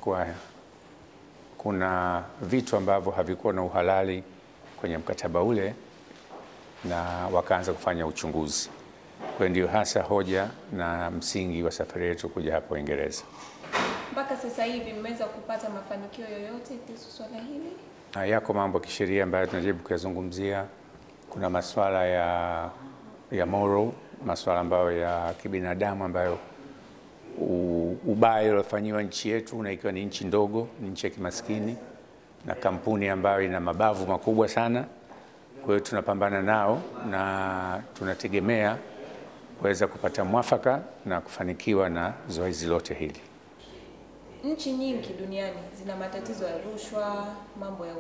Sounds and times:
Female speech, woman speaking: 14.1s - 17.9s, 44.4s - 48.0s.

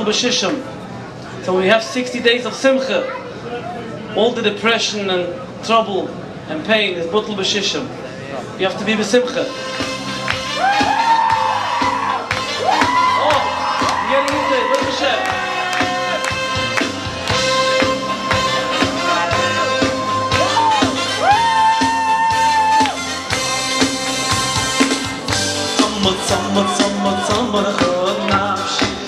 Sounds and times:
Music of Latin America: 9.5s - 29.0s
Rock and roll: 9.5s - 29.0s
Singing: 25.6s - 29.0s.

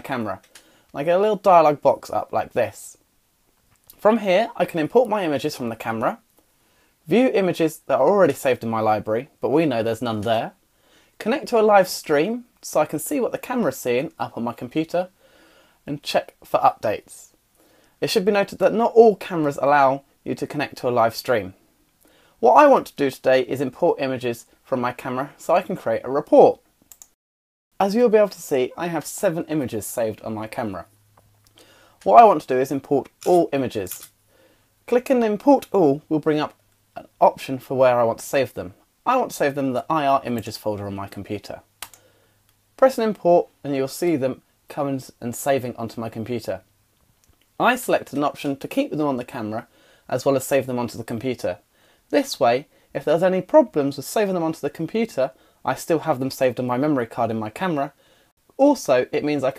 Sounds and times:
Speech: 0.0s - 3.0s, 3.9s - 6.2s, 7.1s - 10.6s, 11.2s - 15.2s, 15.9s - 17.4s, 18.0s - 21.6s, 22.4s - 26.6s, 27.8s - 30.9s, 32.0s - 34.1s, 34.9s - 41.7s, 42.8s - 46.7s, 47.6s - 58.0s, 58.6s - 59.5s.

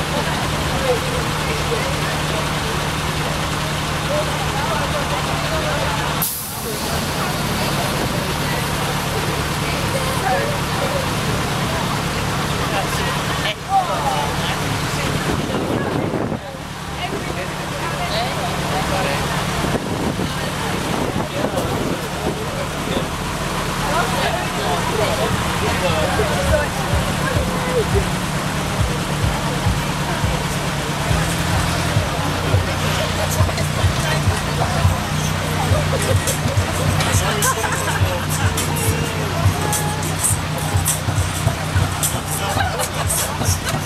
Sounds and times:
Car: 0.0s - 43.8s
Speech: 0.0s - 43.8s.

